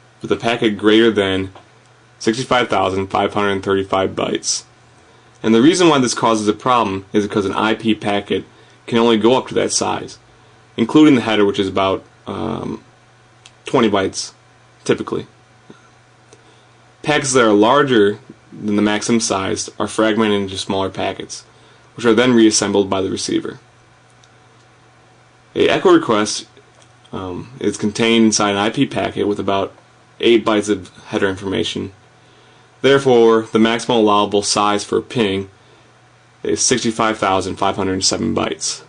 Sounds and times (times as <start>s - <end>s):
Speech: 0.2s - 1.6s, 2.2s - 4.7s, 5.4s - 10.2s, 10.8s - 12.9s, 13.5s - 15.4s, 17.0s - 23.7s, 25.5s - 32.0s, 32.8s - 35.6s, 36.4s - 38.8s.